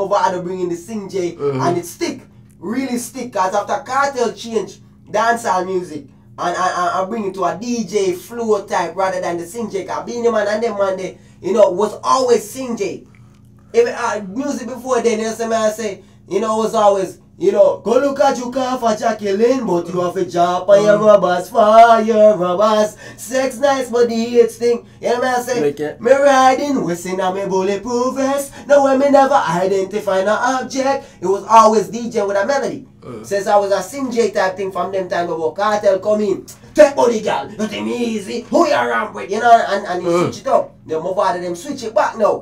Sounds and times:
Speech: 0:00.0 - 0:13.1, 0:13.7 - 0:42.4.

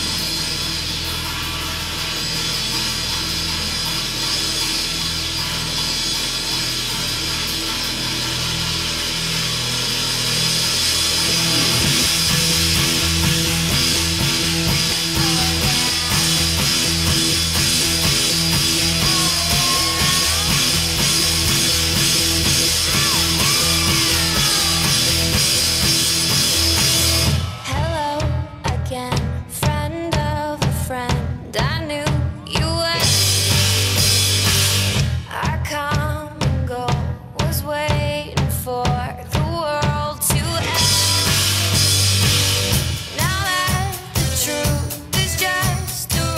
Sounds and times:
Drum kit: 0:00.0 - 0:46.3
Bass drum: 0:11.0 - 0:37.3, 0:38.0 - 0:46.3.

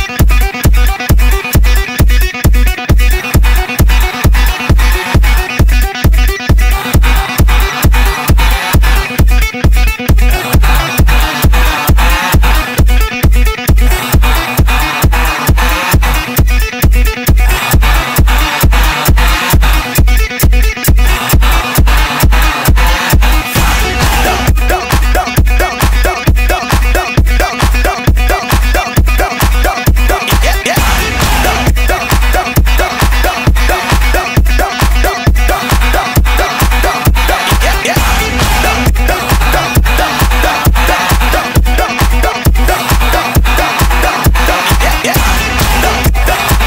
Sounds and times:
Music: 0:00.0 - 0:46.6.

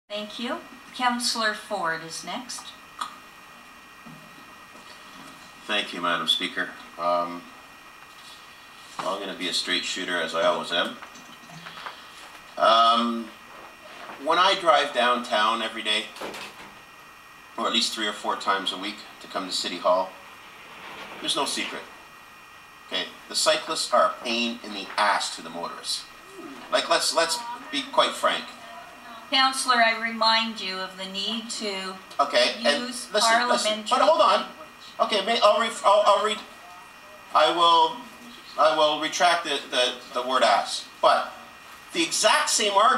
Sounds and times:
Speech: 0:00.1 - 0:02.8, 0:05.6 - 0:07.5, 0:09.0 - 0:11.0, 0:12.6 - 0:13.3, 0:14.1 - 0:16.2, 0:17.6 - 0:20.2, 0:21.2 - 0:21.9, 0:22.9 - 0:42.9.

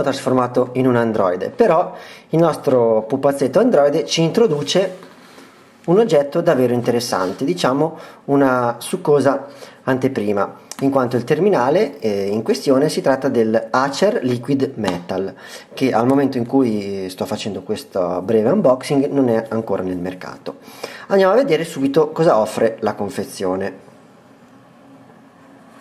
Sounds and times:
Speech: 0:00.0 - 0:05.1, 0:05.9 - 0:23.8.

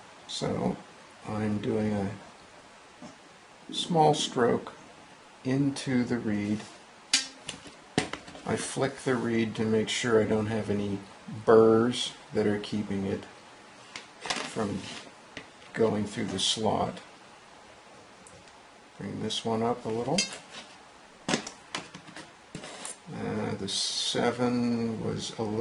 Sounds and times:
Speech: 0:00.3 - 0:02.3, 0:03.7 - 0:04.8, 0:05.4 - 0:06.8, 0:08.4 - 0:13.4, 0:14.4 - 0:15.0, 0:15.7 - 0:17.1, 0:19.0 - 0:20.4, 0:23.1 - 0:25.6.

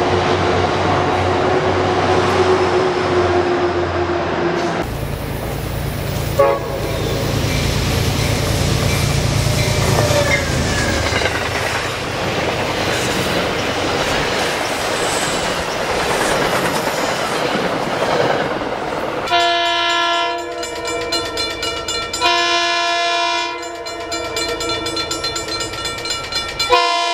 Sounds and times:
Railroad car, train wagon: 0:00.0 - 0:27.1
Subway, metro, underground: 0:00.0 - 0:27.1
Train horn: 0:06.4 - 0:07.2, 0:19.3 - 0:21.2, 0:22.2 - 0:25.0, 0:26.7 - 0:27.1
Clickety-clack: 0:08.8 - 0:21.6.

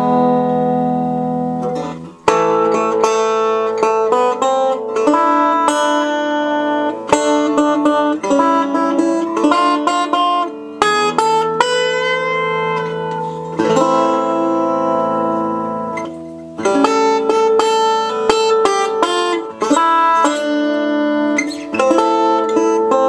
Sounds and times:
Guitar: 0:00.0 - 0:23.0.

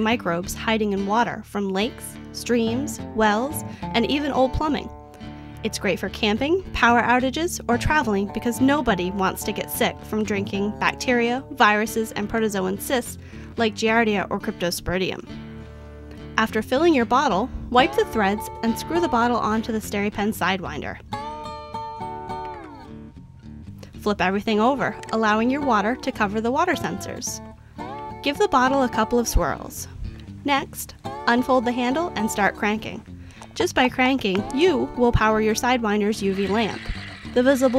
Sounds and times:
Speech: 0:00.0 - 0:04.9, 0:05.7 - 0:15.2, 0:16.4 - 0:21.0, 0:24.0 - 0:27.4, 0:28.3 - 0:33.0, 0:33.6 - 0:36.8, 0:37.4 - 0:37.7
Music: 0:00.0 - 0:37.7.

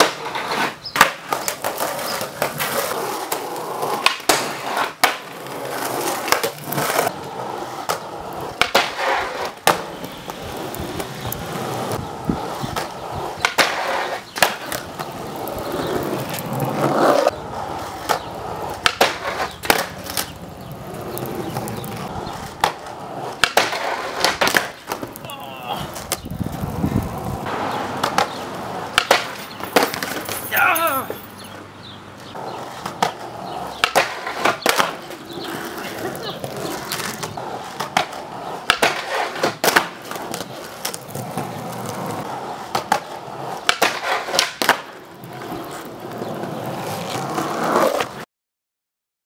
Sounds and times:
Skateboard: 0:00.0 - 0:31.6, 0:32.2 - 0:48.3.

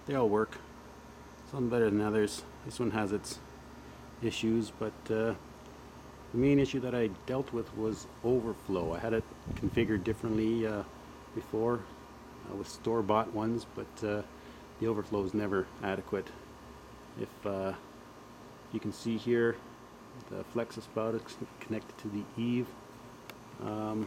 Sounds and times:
Speech: 0:00.0 - 0:00.7, 0:01.5 - 0:03.5, 0:04.2 - 0:05.4, 0:06.3 - 0:16.4, 0:17.2 - 0:17.9, 0:18.7 - 0:22.8, 0:23.6 - 0:24.0.

